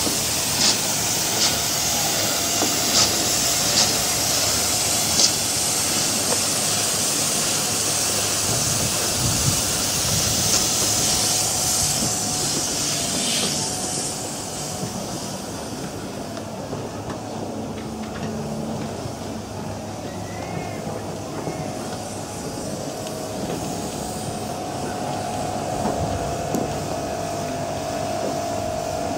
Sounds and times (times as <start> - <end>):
Boat, Water vehicle: 0.0 - 29.1.